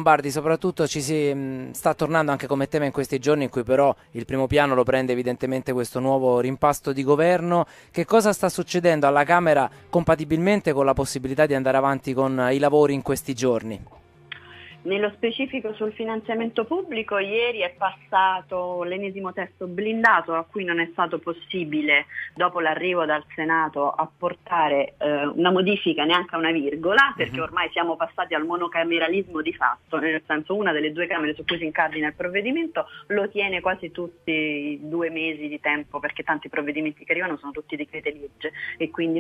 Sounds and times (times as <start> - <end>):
Music: 0.0 - 39.2
Speech: 14.9 - 39.2.